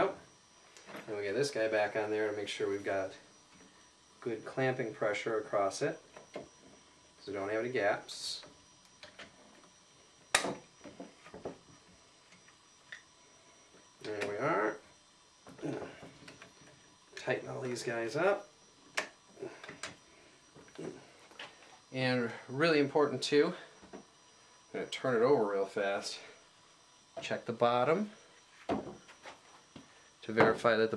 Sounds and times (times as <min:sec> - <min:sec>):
Speech: 0:01.1 - 0:03.2, 0:04.2 - 0:06.0, 0:07.2 - 0:08.5, 0:14.0 - 0:14.8, 0:17.2 - 0:18.5, 0:22.0 - 0:23.7, 0:24.8 - 0:26.3, 0:27.2 - 0:28.2, 0:30.2 - 0:30.9.